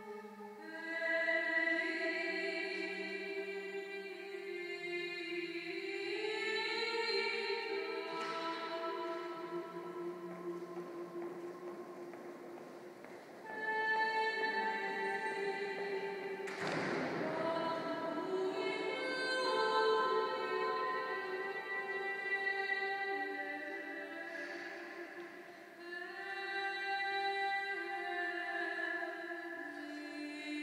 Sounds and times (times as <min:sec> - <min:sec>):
Female singing: 0:00.0 - 0:12.0, 0:13.4 - 0:25.2, 0:25.8 - 0:30.6.